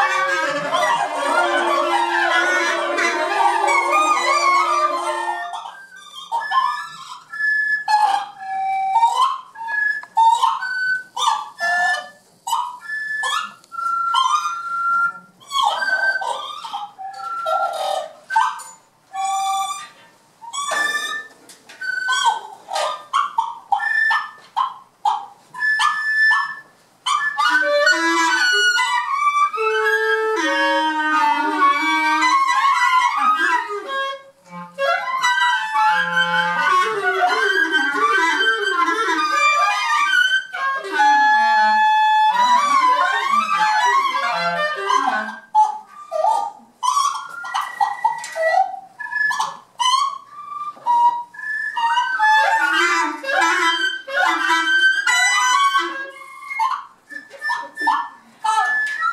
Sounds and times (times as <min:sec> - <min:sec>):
Wind instrument, woodwind instrument: 0:00.0 - 0:59.1.